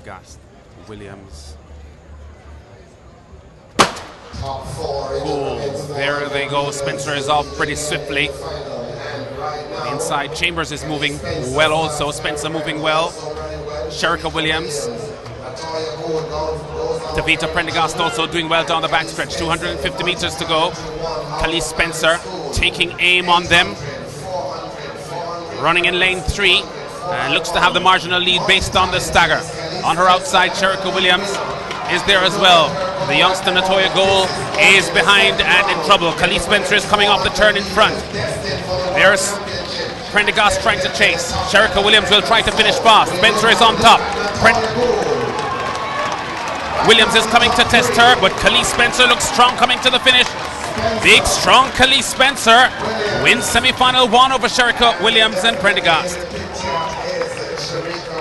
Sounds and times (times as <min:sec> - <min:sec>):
Speech: 0:00.0 - 0:01.6, 0:04.4 - 0:45.3, 0:46.8 - 0:58.2
Run: 0:30.8 - 0:58.2.